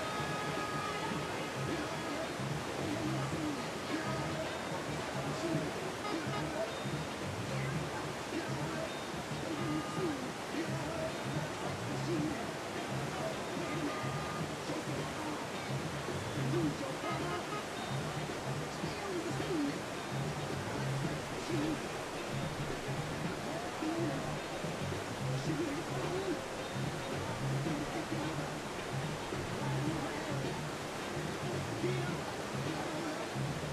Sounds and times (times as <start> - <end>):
Boat, Water vehicle: 0.0 - 33.7
Music: 0.0 - 33.7.